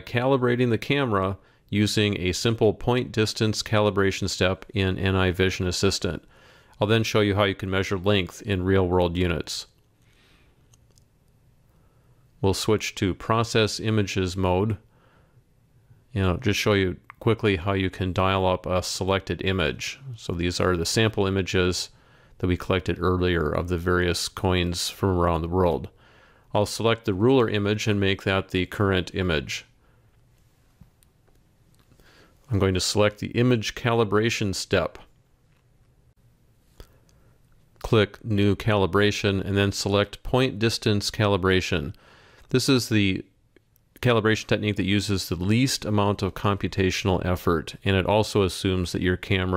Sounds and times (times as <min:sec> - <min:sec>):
Speech: 0:00.0 - 0:09.8, 0:12.4 - 0:14.9, 0:16.1 - 0:29.8, 0:32.5 - 0:35.1, 0:37.8 - 0:43.4, 0:44.0 - 0:49.5.